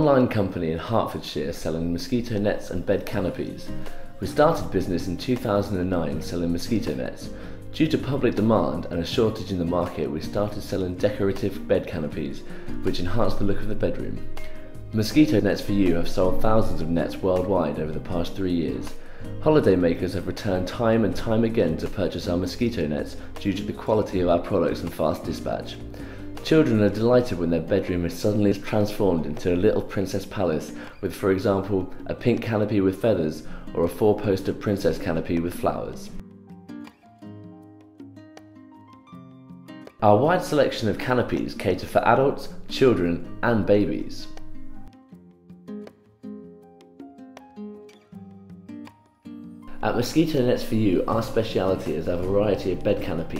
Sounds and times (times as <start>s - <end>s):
Speech: 0.0s - 14.2s, 14.9s - 25.8s, 26.4s - 36.2s, 40.0s - 44.4s, 49.7s - 53.3s
Music: 0.0s - 53.3s.